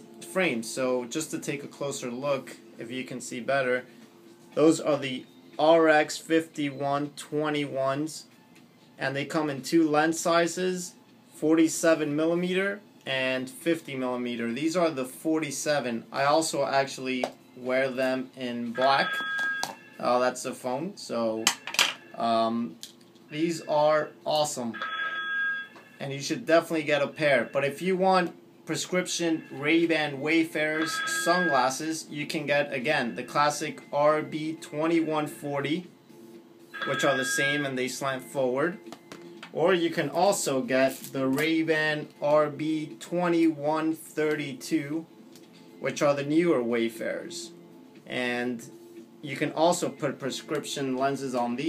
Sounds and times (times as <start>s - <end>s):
Speech: 22.2s - 24.8s, 26.0s - 35.9s, 39.6s - 45.1s, 45.8s - 51.6s.